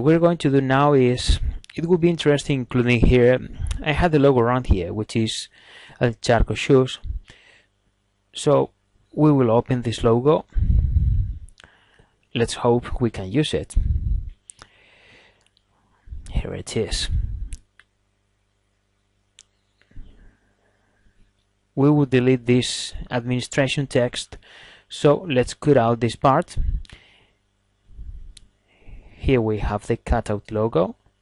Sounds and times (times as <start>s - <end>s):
Speech: 0.0s - 7.3s, 8.4s - 10.6s, 12.4s - 14.1s, 16.1s - 17.5s, 21.8s - 26.9s, 29.2s - 31.0s.